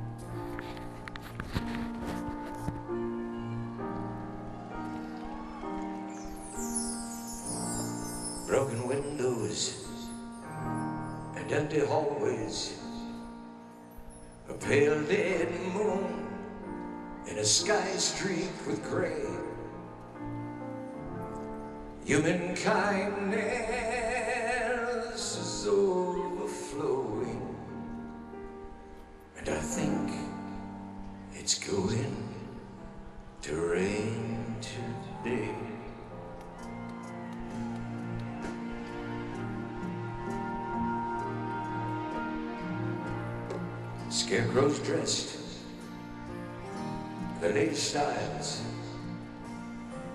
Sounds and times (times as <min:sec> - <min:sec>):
Music: 0:00.0 - 0:50.1.